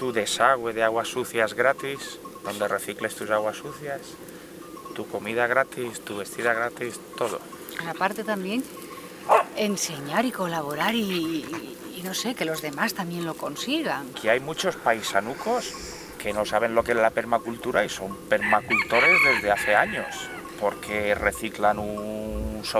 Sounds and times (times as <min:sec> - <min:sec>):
Speech: 0:00.0 - 0:04.2, 0:04.9 - 0:08.6, 0:09.6 - 0:22.7
Rustling leaves: 0:00.0 - 0:22.7.